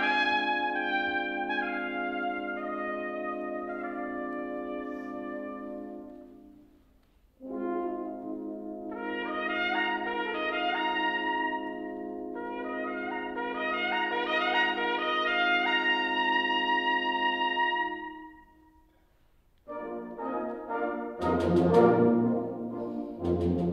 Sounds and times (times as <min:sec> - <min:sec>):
Trumpet: 0:00.0 - 0:19.0, 0:19.6 - 0:23.7.